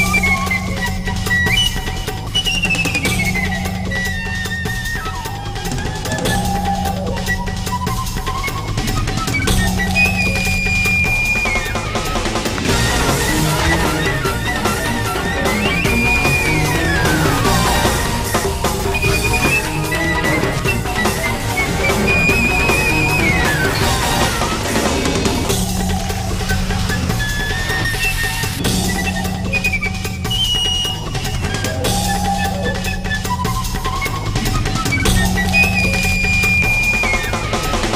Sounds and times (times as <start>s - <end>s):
Music: 0.0s - 37.9s.